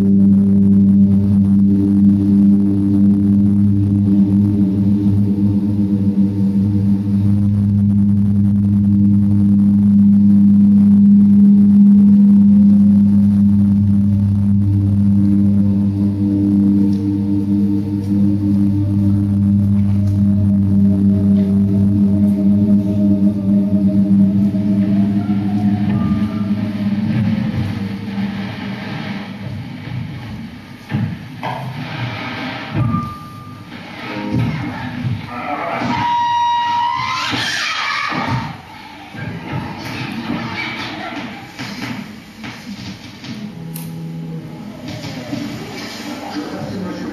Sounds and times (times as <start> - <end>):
Music: 0.0 - 47.1.